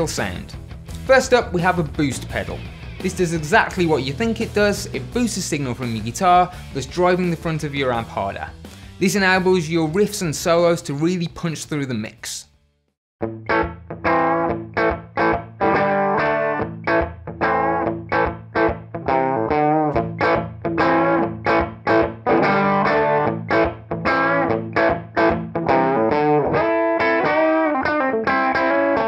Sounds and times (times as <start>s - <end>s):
Speech: 0.0s - 12.5s
Music: 0.0s - 29.0s.